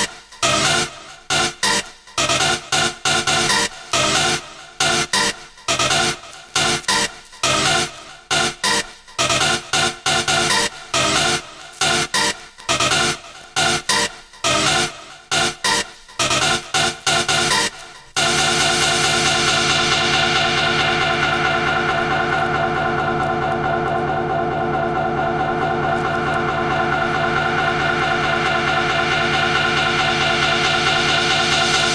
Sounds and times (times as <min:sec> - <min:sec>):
Techno: 0:00.0 - 0:31.9.